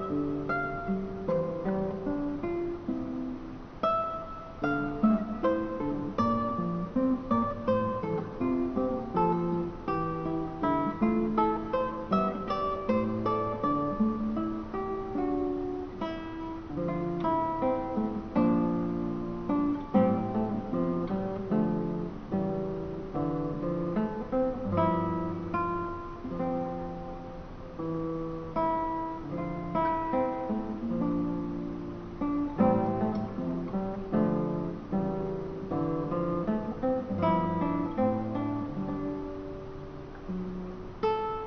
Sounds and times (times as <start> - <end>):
Music: 0.0 - 41.4.